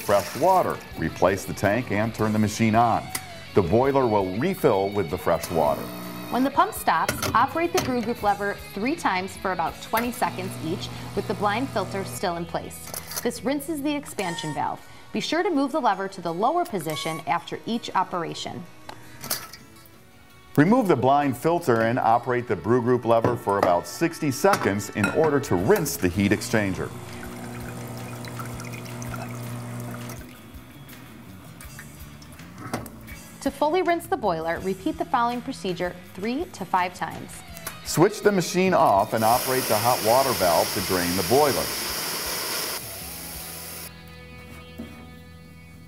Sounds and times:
Music: 0.0s - 45.8s
Speech: 20.6s - 26.9s, 37.9s - 41.7s
Pour: 26.3s - 30.5s, 39.2s - 42.8s.

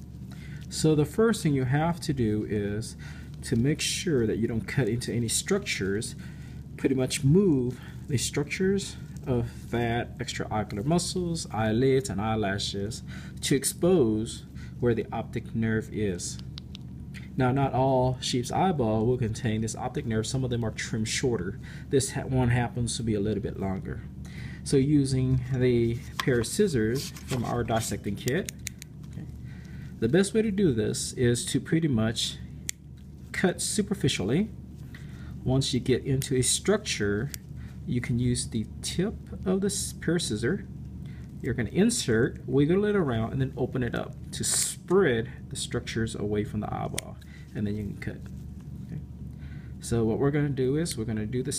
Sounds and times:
Speech: 0.7s - 6.2s, 6.8s - 16.5s, 17.3s - 28.6s, 30.0s - 32.5s, 33.3s - 34.6s, 35.4s - 40.7s, 41.4s - 48.3s, 49.8s - 51.5s.

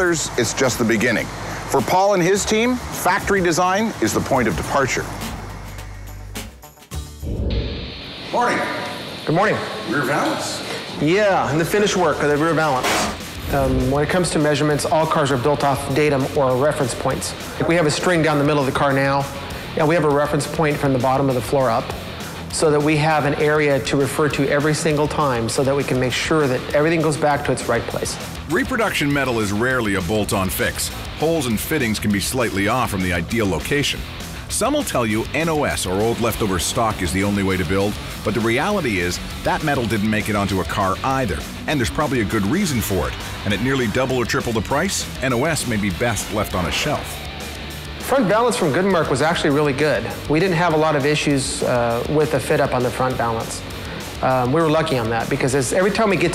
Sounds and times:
Speech: 0.0s - 5.1s, 8.4s - 21.9s, 22.5s - 47.2s, 48.1s - 53.6s, 54.2s - 56.3s
Music: 0.0s - 56.3s.

